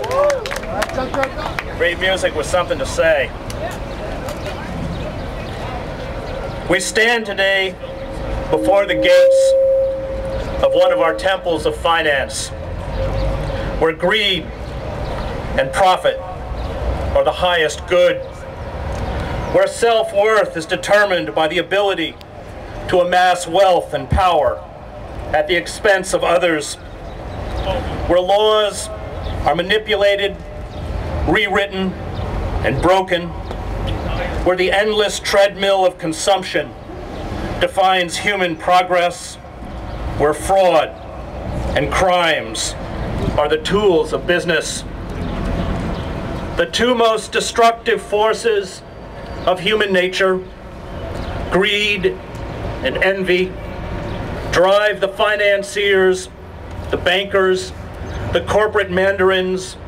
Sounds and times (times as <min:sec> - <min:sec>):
Male speech, man speaking: 0:01.8 - 0:03.8, 0:06.7 - 0:07.8, 0:08.5 - 0:09.6, 0:10.6 - 0:12.6, 0:13.8 - 0:14.5, 0:15.6 - 0:16.3, 0:17.2 - 0:18.2, 0:19.6 - 0:22.2, 0:22.9 - 0:24.6, 0:25.4 - 0:26.8, 0:27.7 - 0:28.9, 0:29.5 - 0:30.4, 0:31.3 - 0:32.0, 0:32.6 - 0:33.3, 0:34.1 - 0:36.7, 0:37.6 - 0:39.4, 0:40.2 - 0:40.9, 0:41.8 - 0:42.8, 0:43.4 - 0:44.9, 0:46.6 - 0:48.8, 0:49.5 - 0:50.5, 0:51.5 - 0:52.2, 0:52.8 - 0:53.6, 0:54.5 - 0:56.3, 0:57.0 - 0:57.8, 0:58.4 - 0:59.8
Narration, monologue: 0:06.6 - 0:59.8.